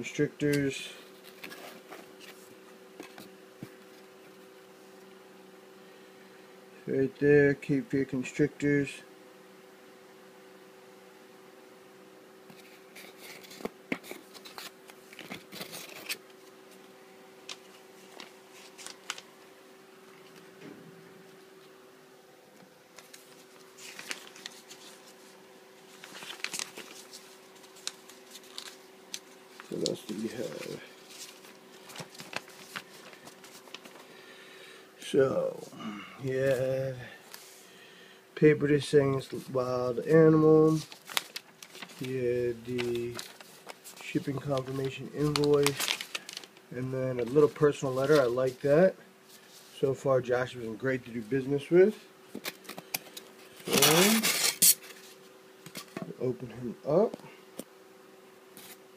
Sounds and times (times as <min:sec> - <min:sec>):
Speech: 0:00.0 - 0:01.0, 0:06.8 - 0:09.1, 0:29.7 - 0:30.9, 0:35.0 - 0:37.2, 0:38.4 - 0:40.9, 0:42.0 - 0:43.2, 0:44.0 - 0:45.8, 0:46.7 - 0:49.0, 0:49.8 - 0:52.1, 0:53.7 - 0:54.3, 0:56.0 - 0:57.3
Inside, small room: 0:00.0 - 0:58.9.